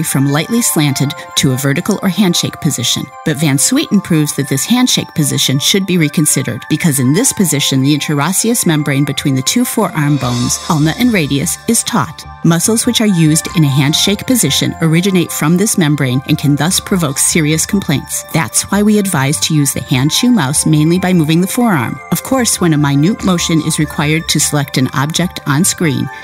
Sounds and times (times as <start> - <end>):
Music: 0.0 - 26.2
Speech: 0.0 - 26.2.